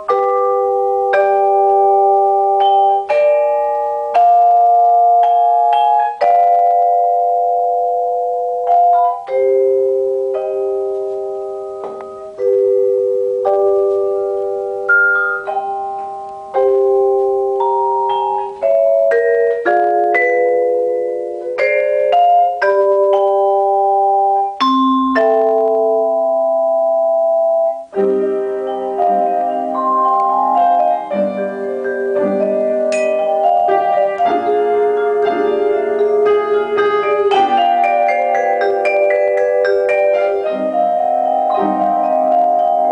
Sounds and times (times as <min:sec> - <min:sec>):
Marimba, xylophone: 0:00.0 - 0:42.9
Vibraphone: 0:00.0 - 0:42.9.